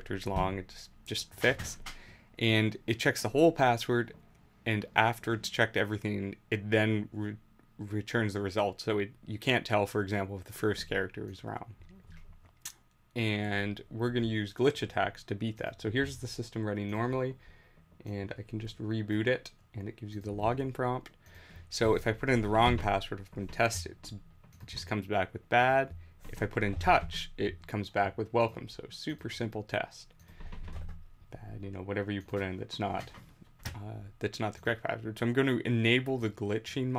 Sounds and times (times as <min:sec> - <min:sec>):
Speech: 0:00.0 - 0:01.8, 0:02.4 - 0:11.8, 0:13.2 - 0:17.4, 0:18.0 - 0:21.1, 0:21.7 - 0:30.1, 0:31.4 - 0:33.2, 0:33.8 - 0:36.9.